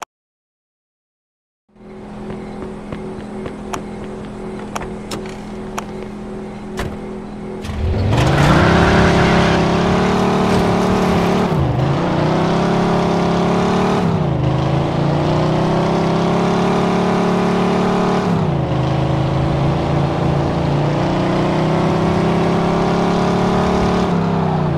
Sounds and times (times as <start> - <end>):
Car: 1.7 - 24.7.